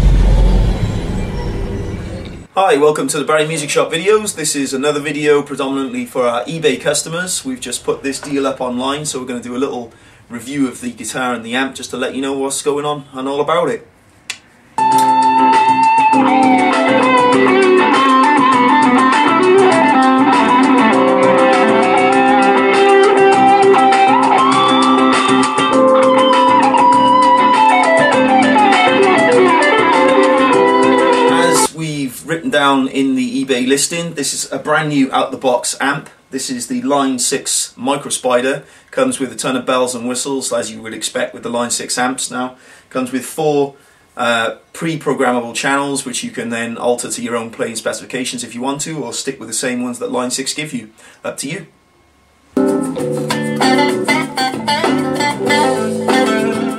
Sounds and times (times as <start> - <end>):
Speech: 2.6 - 13.9, 31.3 - 51.8.